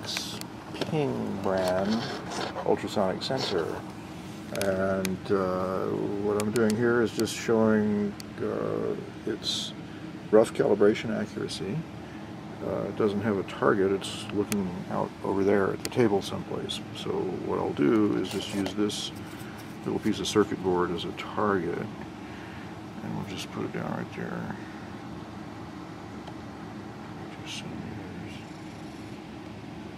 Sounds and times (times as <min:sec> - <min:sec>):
Speech: 0:00.0 - 0:03.8, 0:04.5 - 0:11.9, 0:12.6 - 0:19.2, 0:19.8 - 0:22.0, 0:23.0 - 0:24.7, 0:27.3 - 0:28.5.